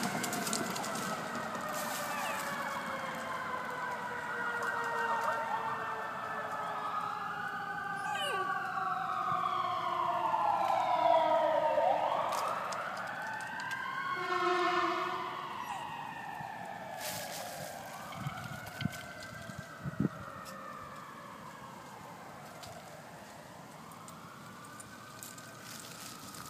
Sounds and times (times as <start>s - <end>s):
Police car (siren): 0.0s - 26.4s.